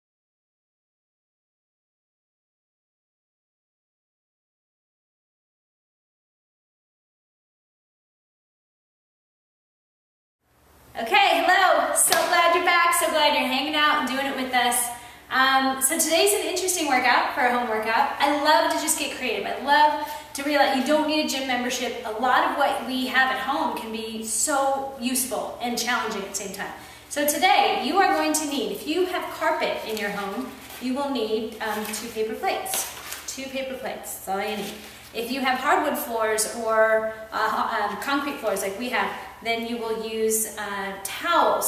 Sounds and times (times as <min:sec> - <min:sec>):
Speech: 0:11.0 - 0:41.6.